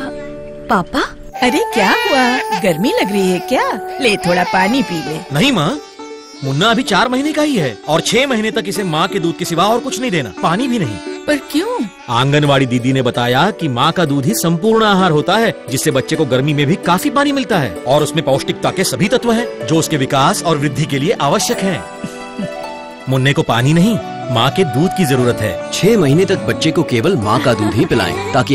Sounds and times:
Music: 0.0 - 28.5
Speech: 23.1 - 28.5.

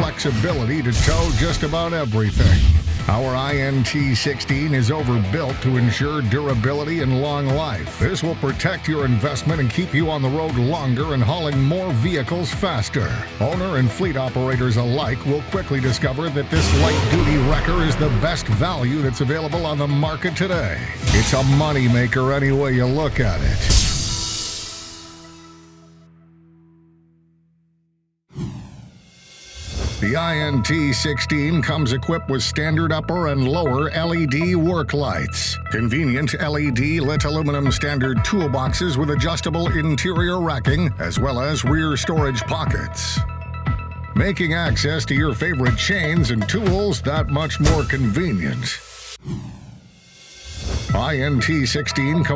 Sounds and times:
Speech: 0.0 - 23.8, 30.0 - 43.3, 44.2 - 48.8, 50.9 - 52.3
Music: 0.0 - 28.0, 29.0 - 49.2, 50.0 - 52.3.

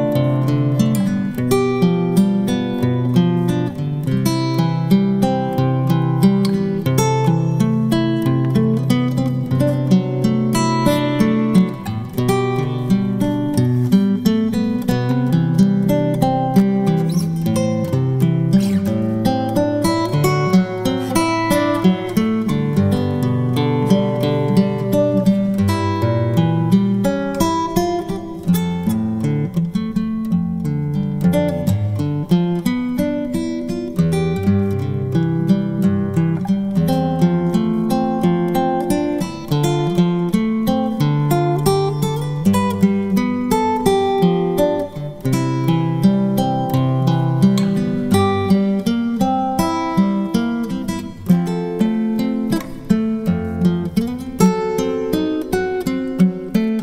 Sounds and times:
Electric guitar: 0.0 - 56.8
Strum: 0.0 - 56.8.

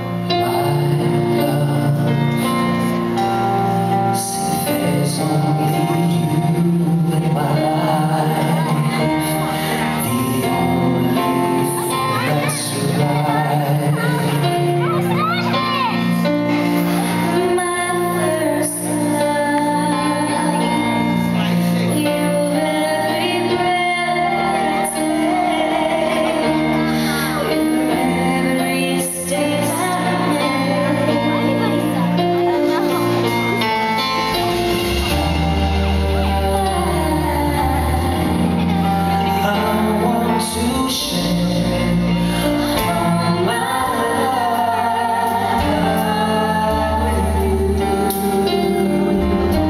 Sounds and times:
Music: 0.0 - 49.6
Female singing: 17.3 - 21.2, 21.9 - 32.2, 36.0 - 41.6, 42.8 - 49.6.

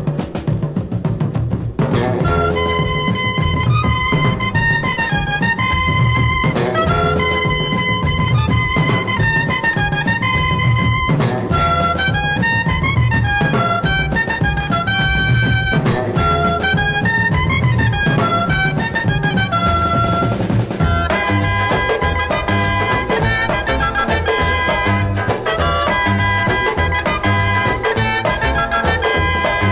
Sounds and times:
Swing music: 0.0 - 29.7.

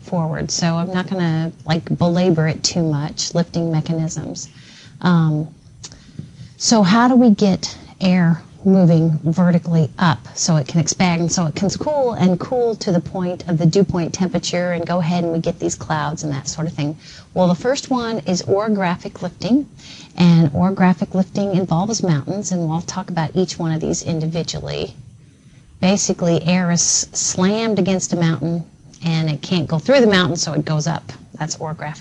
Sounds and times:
Speech: 0.0 - 5.5, 6.6 - 25.0, 25.8 - 32.0.

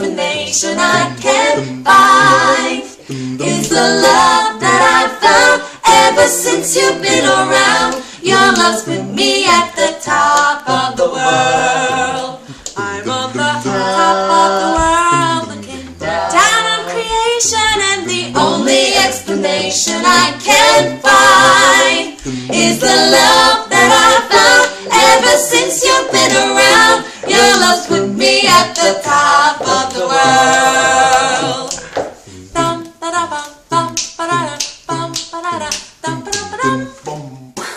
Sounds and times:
Choir: 0.0 - 37.3
Female singing: 12.8 - 30.4, 32.6 - 37.1.

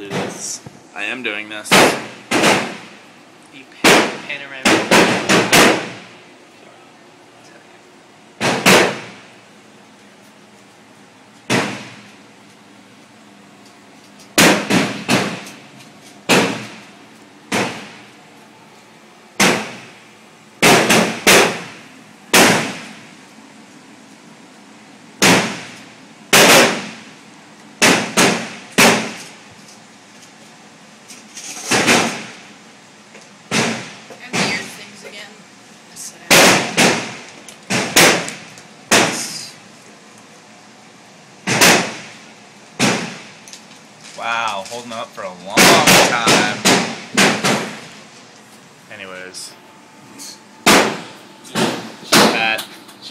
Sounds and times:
Gunshot, gunfire: 1.7 - 2.8, 3.8 - 6.0, 8.4 - 9.1, 11.5 - 11.9, 14.4 - 15.4, 16.3 - 16.8, 17.5 - 17.9, 19.4 - 19.8, 20.6 - 21.7, 22.3 - 22.9, 25.2 - 25.7, 26.3 - 27.0, 27.8 - 29.2, 31.7 - 32.3, 36.3 - 38.3, 38.9 - 39.3, 41.5 - 42.1, 42.8 - 43.3, 45.6 - 47.8, 50.7 - 51.0.

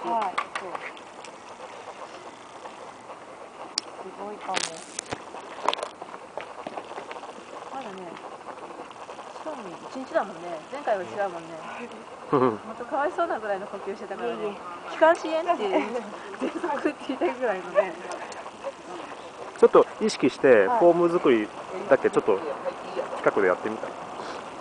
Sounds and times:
Outside, rural or natural: 0.0 - 24.6
Outside, urban or manmade: 0.0 - 24.6.

